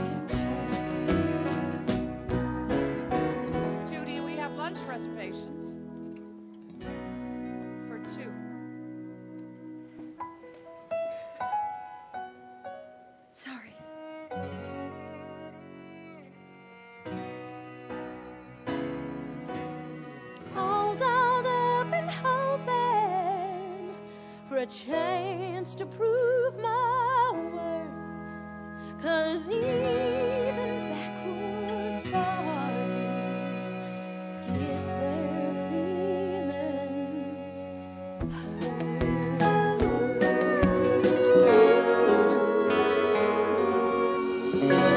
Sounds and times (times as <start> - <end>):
Music: 0.0 - 44.9.